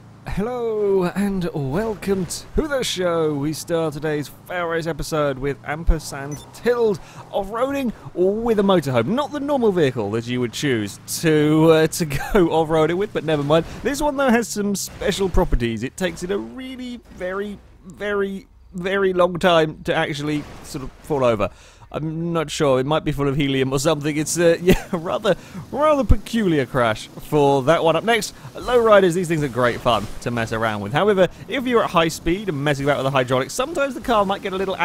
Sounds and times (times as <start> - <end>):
Speech: 0.3 - 34.8.